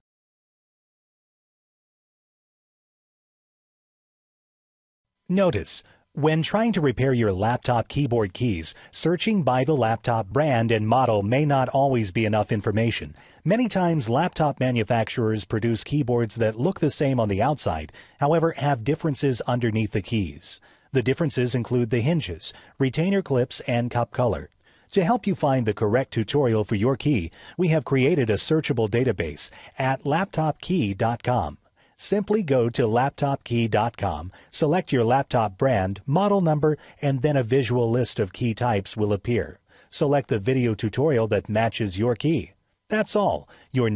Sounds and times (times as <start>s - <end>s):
Speech: 5.3s - 43.9s.